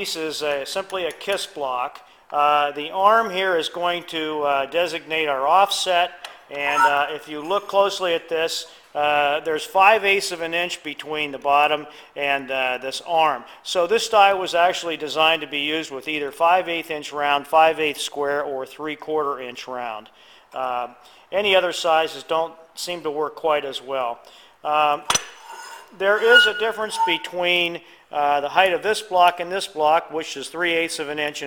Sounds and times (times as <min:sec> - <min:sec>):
Speech: 0:00.0 - 0:25.1, 0:26.0 - 0:31.4.